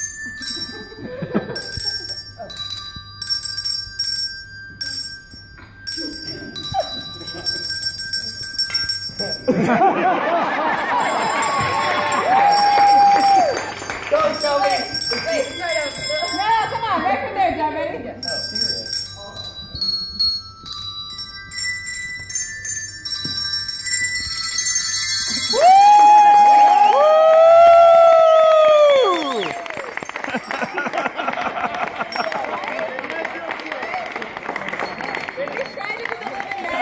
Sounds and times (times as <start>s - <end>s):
Jingle bell: 0.0s - 27.0s, 28.7s - 36.8s.